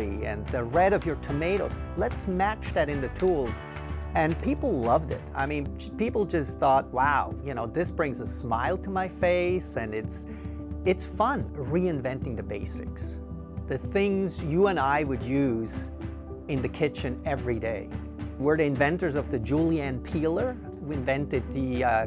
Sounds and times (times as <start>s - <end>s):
Speech: 0.0s - 3.6s, 4.2s - 10.3s, 10.9s - 15.9s, 16.5s - 22.0s
Music: 0.0s - 22.0s.